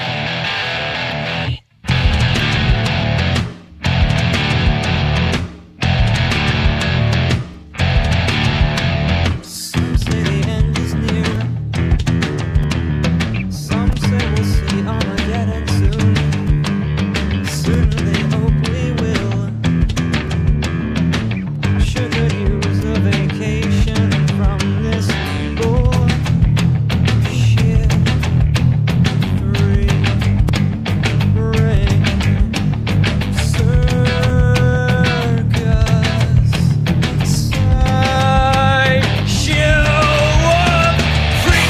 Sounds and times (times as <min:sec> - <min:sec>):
Music: 0:00.0 - 0:41.6.